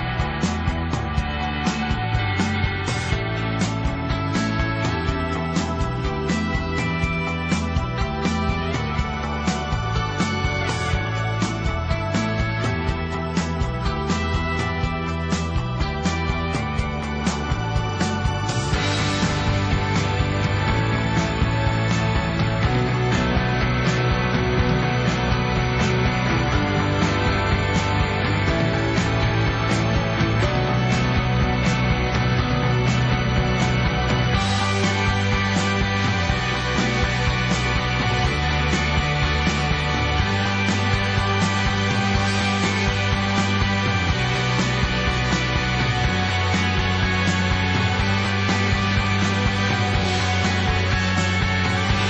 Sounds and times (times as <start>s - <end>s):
Background music: 0.0s - 52.0s.